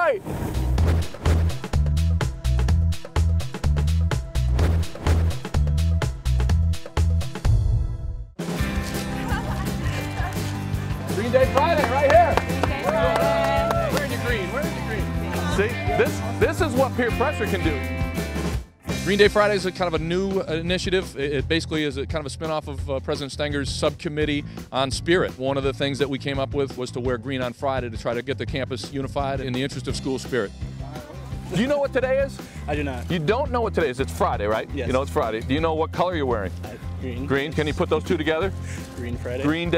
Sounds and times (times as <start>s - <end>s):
Music: 0.0s - 39.7s
Speech: 19.0s - 39.7s.